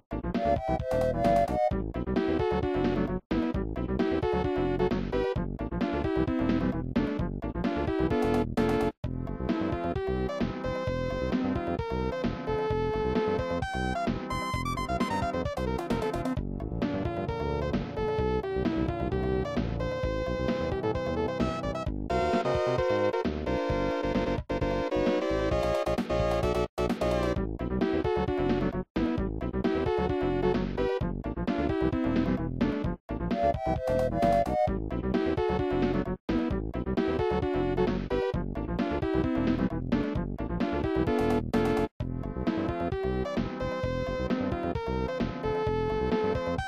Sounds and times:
Soundtrack music: 13.6 - 17.0, 21.2 - 27.6, 33.2 - 34.8.

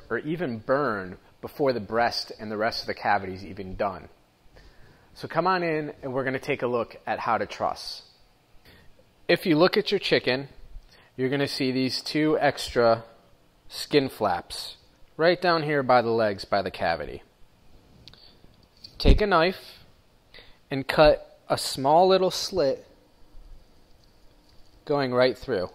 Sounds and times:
Speech: 0.0 - 4.2, 5.2 - 8.2, 9.3 - 10.6, 11.2 - 17.3, 18.9 - 19.9, 20.7 - 23.0, 24.8 - 25.7.

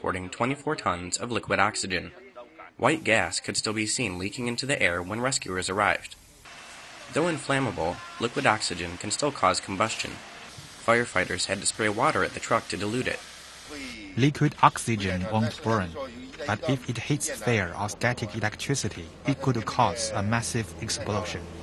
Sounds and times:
Speech: 0.0 - 6.2, 7.0 - 10.2, 10.9 - 21.5
Liquid: 6.5 - 13.8.

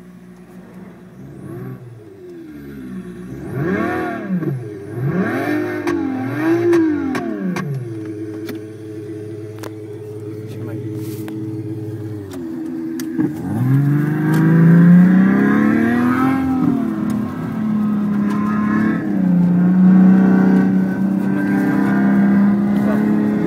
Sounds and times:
Speech: 10.4 - 11.2, 22.8 - 23.4.

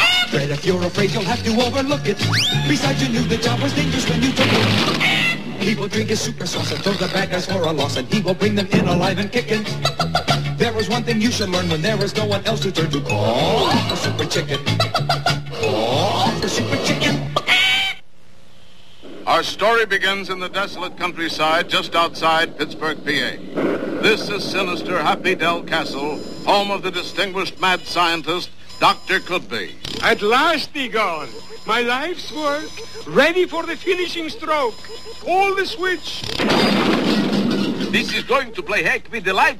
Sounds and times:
Speech: 19.3 - 23.4, 24.0 - 36.3, 37.9 - 39.5.

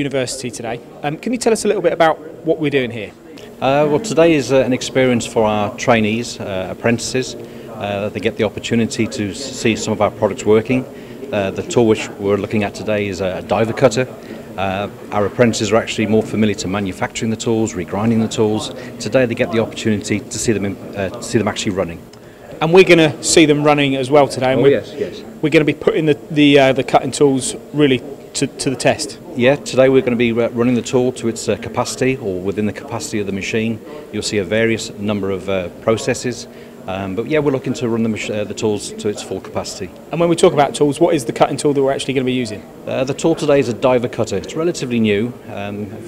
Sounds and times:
Speech: 0.0 - 46.0.

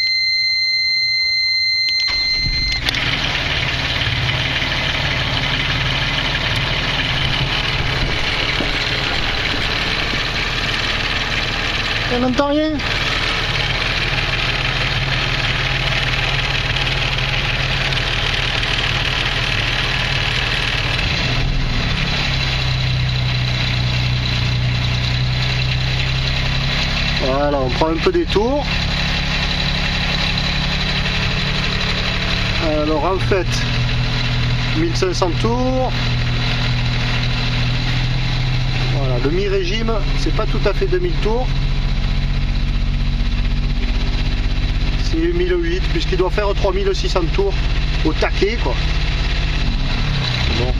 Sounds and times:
Vehicle: 0.0 - 50.7
Idling: 2.1 - 50.7
Speech: 27.2 - 28.7, 32.6 - 33.7, 34.8 - 36.0, 38.9 - 41.5, 45.0 - 48.8, 50.5 - 50.7.

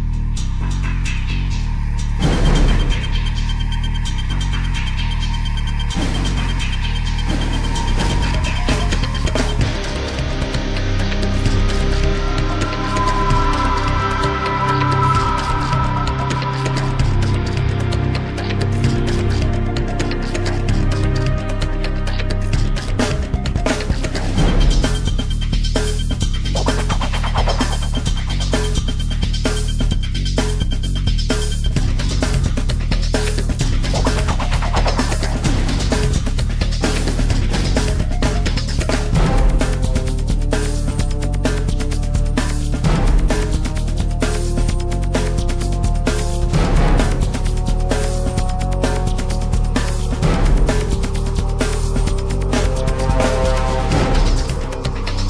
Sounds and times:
Exciting music: 0.0 - 55.2.

